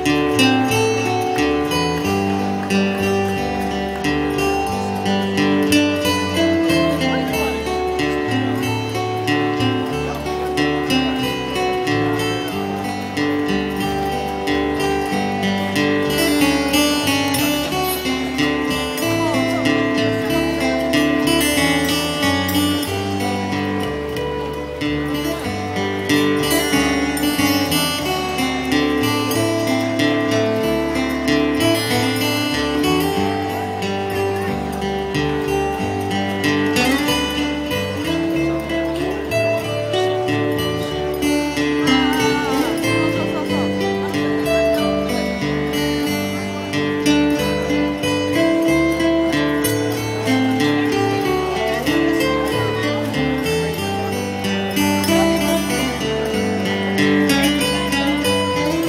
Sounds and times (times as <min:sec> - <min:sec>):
Music: 0:00.0 - 0:58.8
Speech: 0:00.0 - 0:58.8.